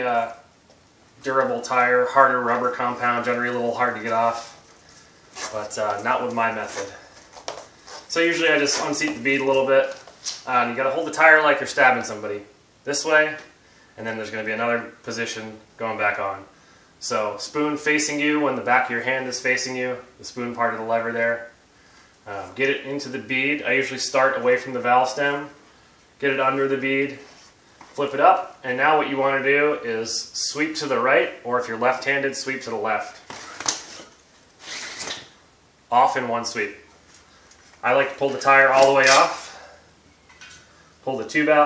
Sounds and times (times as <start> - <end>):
Speech: 0.0 - 0.5, 1.2 - 4.6, 5.4 - 7.0, 8.1 - 21.6, 22.3 - 25.6, 26.2 - 27.3, 28.0 - 33.2, 35.9 - 36.9, 37.8 - 39.7, 41.0 - 41.6.